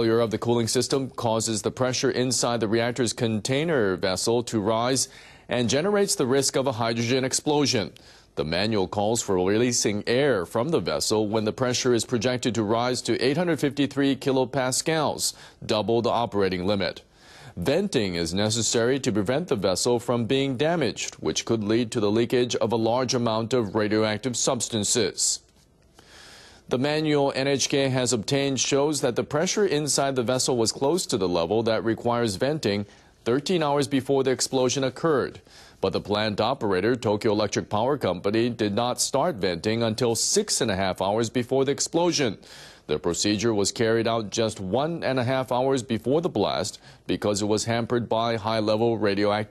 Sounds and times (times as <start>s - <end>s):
Speech: 0.0s - 25.5s, 26.7s - 49.5s.